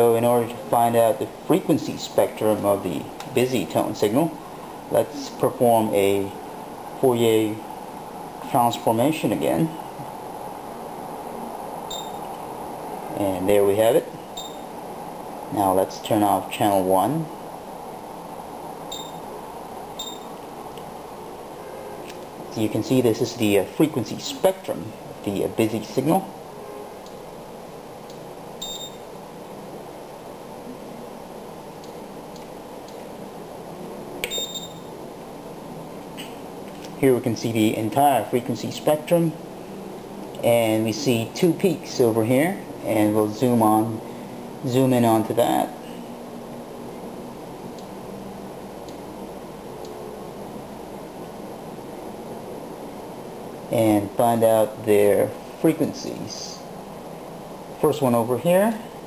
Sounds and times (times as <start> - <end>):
Speech: 0.0 - 6.4, 7.0 - 7.7, 8.4 - 9.8, 13.1 - 14.1, 15.5 - 17.4, 22.5 - 26.3, 37.0 - 39.4, 40.4 - 44.0, 44.6 - 45.8, 53.7 - 56.7, 57.8 - 58.9.